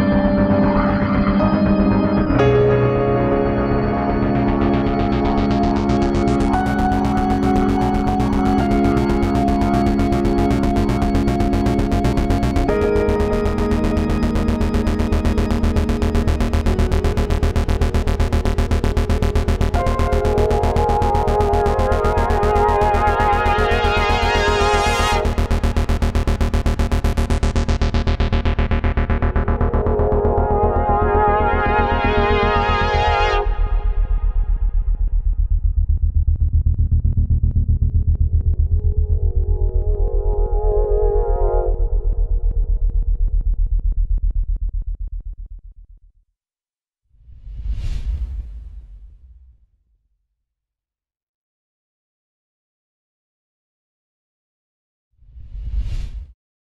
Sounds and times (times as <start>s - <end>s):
Music: 0.0s - 44.8s.